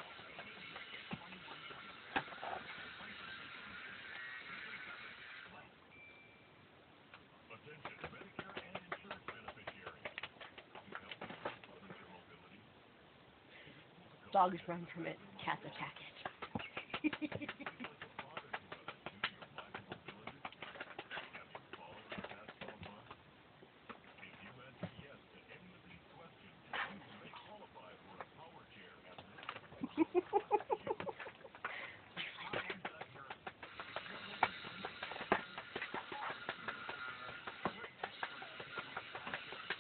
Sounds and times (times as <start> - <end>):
Speech: 7.5 - 10.2, 10.8 - 12.8, 14.1 - 16.3, 24.1 - 29.4.